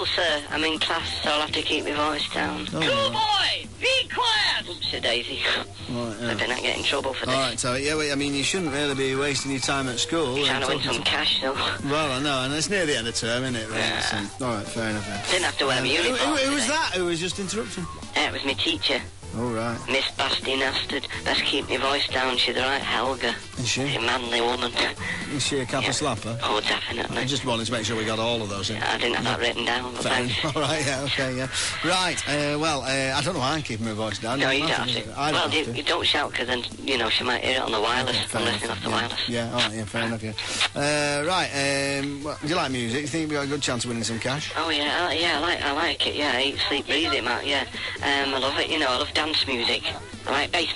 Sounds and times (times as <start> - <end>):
Music: 0.0 - 50.7.